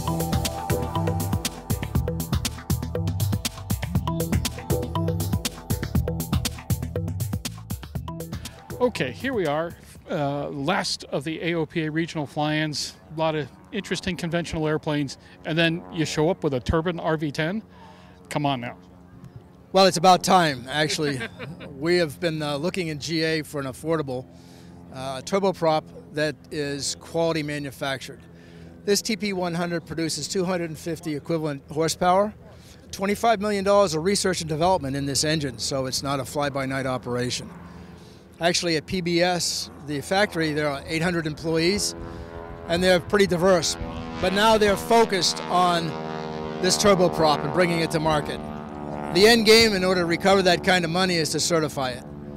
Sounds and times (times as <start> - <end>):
Speech: 8.8 - 17.6, 18.3 - 18.8, 19.8 - 24.2, 25.0 - 28.2, 28.9 - 32.4, 33.0 - 37.5, 38.4 - 41.9, 42.7 - 45.9, 46.6 - 48.4, 49.1 - 52.0.